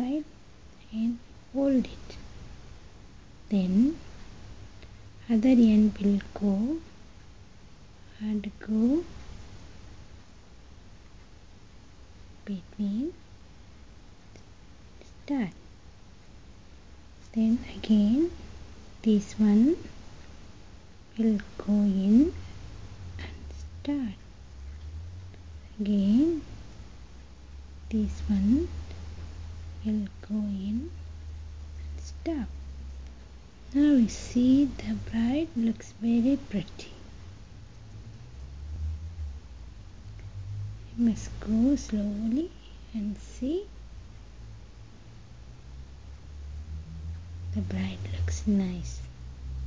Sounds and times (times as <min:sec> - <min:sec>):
Speech: 0:00.0 - 0:02.2, 0:03.5 - 0:04.0, 0:05.2 - 0:06.9, 0:08.1 - 0:09.2, 0:12.4 - 0:13.2, 0:15.0 - 0:15.6, 0:17.2 - 0:18.4, 0:19.0 - 0:20.0, 0:21.1 - 0:22.4, 0:23.2 - 0:24.2, 0:25.7 - 0:26.5, 0:27.9 - 0:28.8, 0:29.8 - 0:31.0, 0:31.8 - 0:32.6, 0:33.7 - 0:37.0, 0:40.9 - 0:43.7, 0:47.5 - 0:49.1
Whispering: 0:00.8 - 0:02.2, 0:17.2 - 0:18.4, 0:23.2 - 0:24.2, 0:47.5 - 0:49.1.